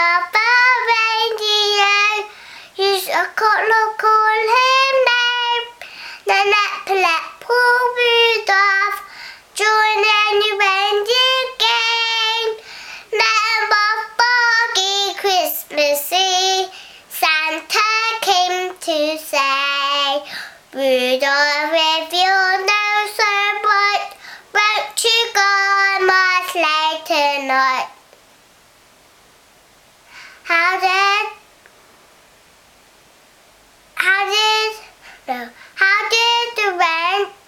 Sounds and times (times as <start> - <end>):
Child singing: 0.0 - 28.0, 30.4 - 31.5, 34.0 - 37.4.